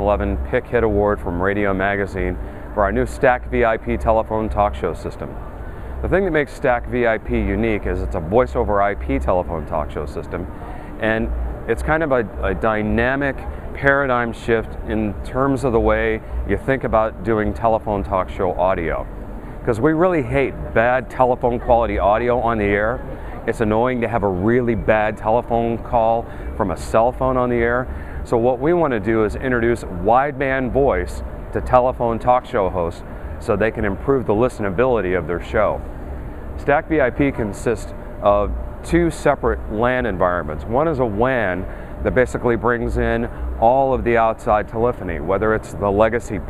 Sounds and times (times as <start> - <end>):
Speech: 0.0 - 35.8, 36.6 - 46.5.